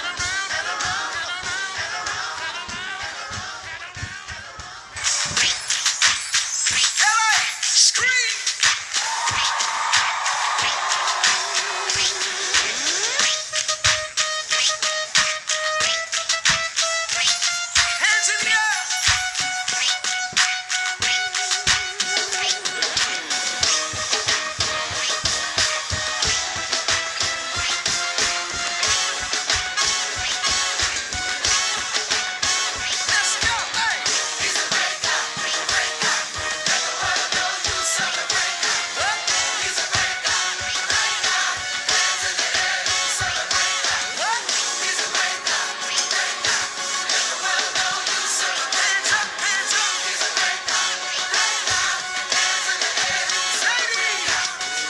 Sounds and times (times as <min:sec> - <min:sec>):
Music: 0:00.0 - 0:54.9.